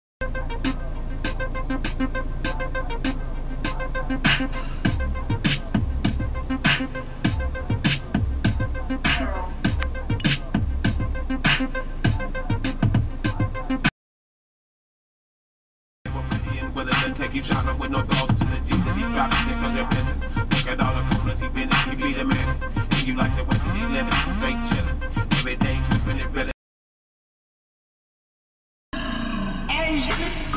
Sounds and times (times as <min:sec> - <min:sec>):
Music: 0:00.2 - 0:13.9, 0:16.1 - 0:26.6.